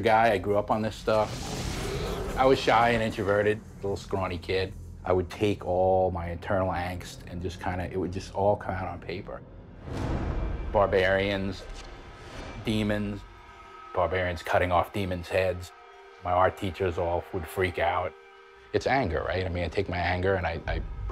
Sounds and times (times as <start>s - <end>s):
Speech: 0.0s - 1.4s, 2.3s - 9.4s, 10.7s - 11.7s, 12.6s - 13.2s, 13.9s - 18.1s, 18.7s - 20.9s
Music: 0.0s - 21.1s.